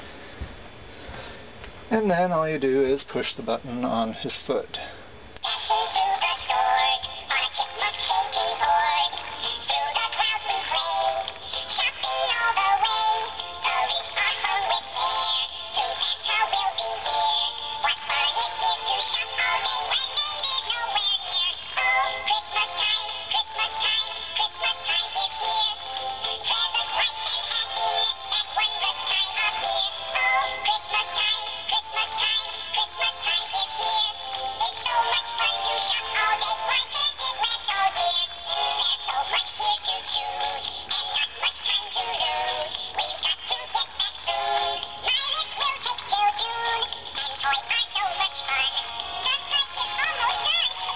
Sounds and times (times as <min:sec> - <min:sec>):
Music: 0:05.4 - 0:50.9
Synthetic singing: 0:05.4 - 0:50.9.